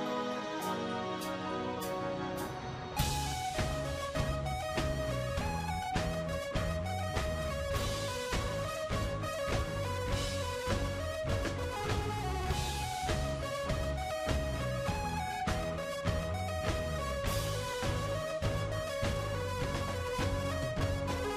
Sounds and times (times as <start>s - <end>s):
Music: 0.0s - 21.3s.